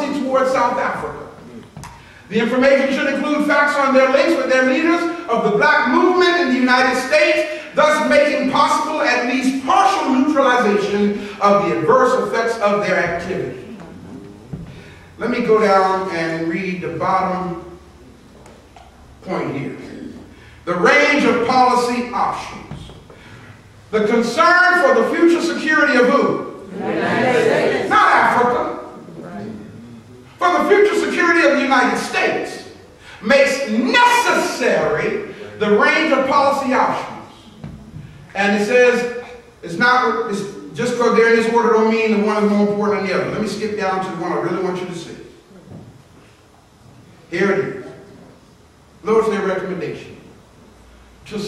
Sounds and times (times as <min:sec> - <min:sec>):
Speech: 0:00.0 - 0:01.6, 0:02.3 - 0:14.4, 0:15.2 - 0:17.8, 0:19.2 - 0:22.9, 0:23.9 - 0:45.8, 0:47.3 - 0:48.4, 0:49.0 - 0:50.3.